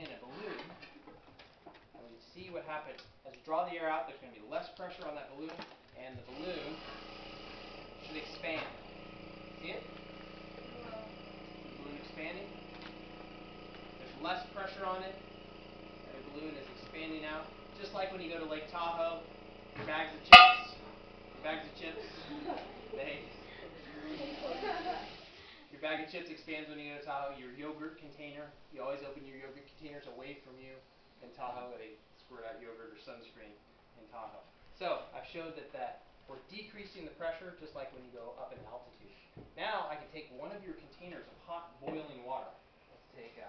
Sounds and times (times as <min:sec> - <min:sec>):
Speech: 0:00.0 - 0:00.8, 0:01.9 - 0:06.9, 0:08.0 - 0:08.8, 0:11.8 - 0:12.6, 0:14.0 - 0:15.2, 0:16.1 - 0:20.4, 0:21.4 - 0:25.0, 0:25.7 - 0:43.4.